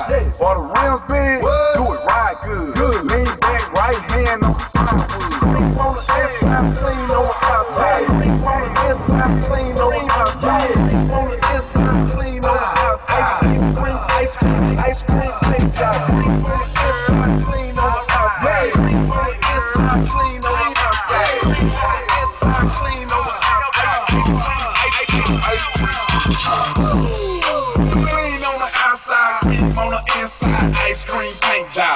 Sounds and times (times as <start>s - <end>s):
Music: 0.0s - 31.9s.